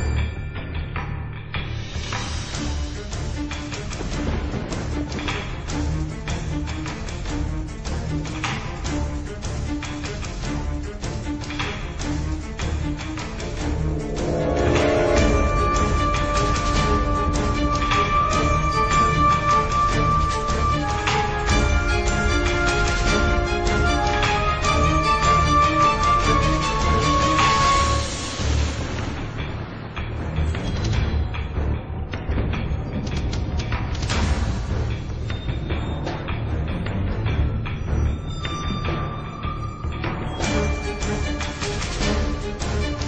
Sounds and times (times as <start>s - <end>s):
Music: 0.0s - 43.0s.